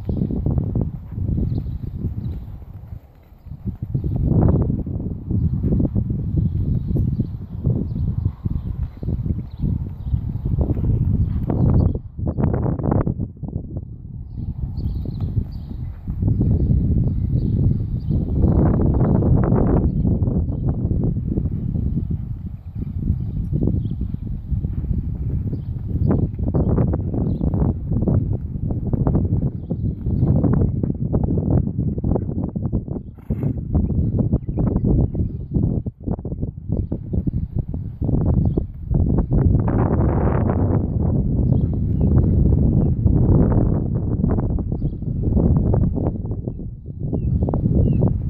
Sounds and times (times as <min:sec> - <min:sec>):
Outside, urban or manmade: 0:00.0 - 0:48.2.